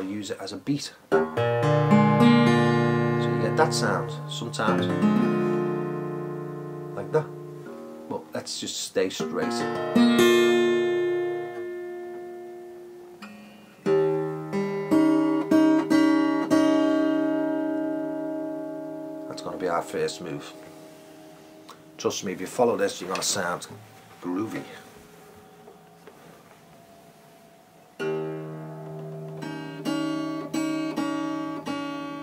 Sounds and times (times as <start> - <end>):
Speech: 0.0 - 1.0, 3.2 - 5.0, 7.0 - 7.3, 8.1 - 9.8, 19.3 - 20.6, 22.0 - 24.9
Acoustic guitar: 1.0 - 32.2
Blues: 1.0 - 32.2.